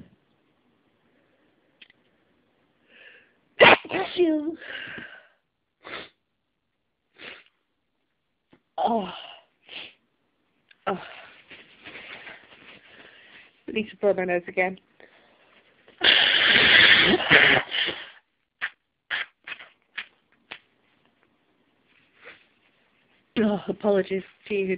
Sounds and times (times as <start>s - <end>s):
Sneeze: 3.6s - 5.2s, 16.0s - 20.1s
Speech: 3.9s - 4.6s, 13.7s - 14.8s, 23.4s - 24.7s.